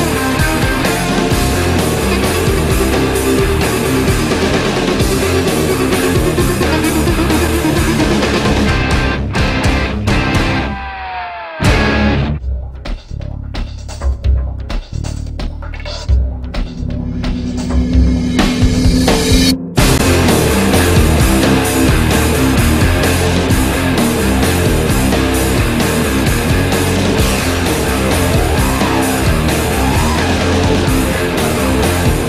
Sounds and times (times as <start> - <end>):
Punk rock: 0.0 - 12.4, 19.8 - 32.2.